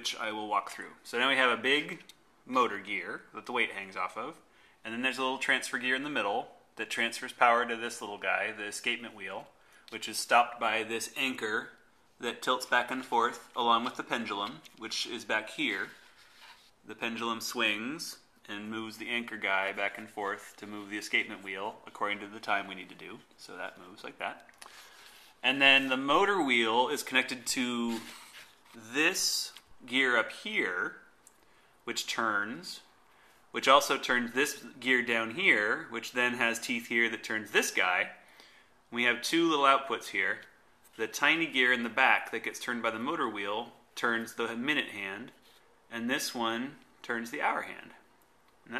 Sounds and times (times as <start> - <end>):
Speech: 0.0 - 16.0, 16.8 - 24.5, 25.4 - 31.1, 31.8 - 32.9, 33.5 - 38.2, 38.9 - 48.7.